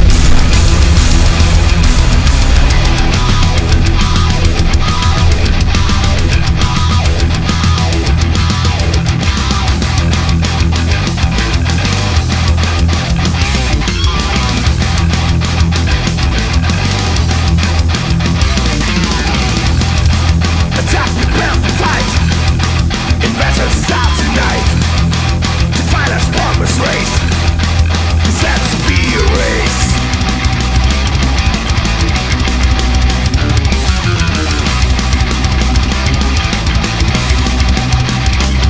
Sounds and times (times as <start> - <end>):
Heavy metal: 0.0 - 38.7.